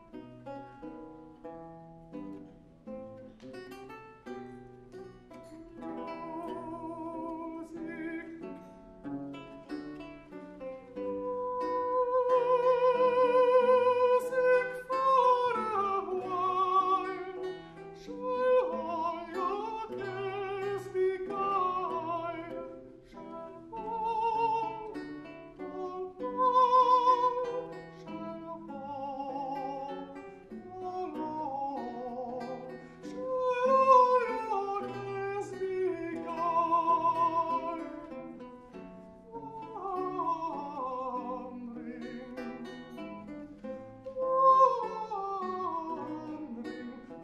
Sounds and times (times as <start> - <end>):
Music: 0.0 - 47.2.